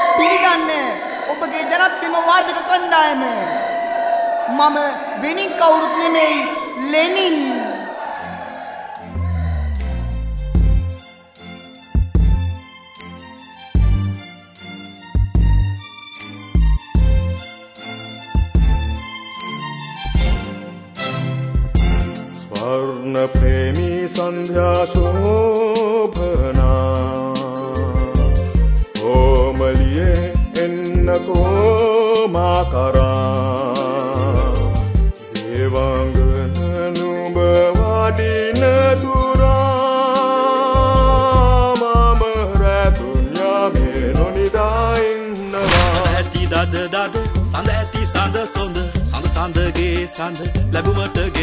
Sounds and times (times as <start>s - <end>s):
Music: 5.1s - 51.4s.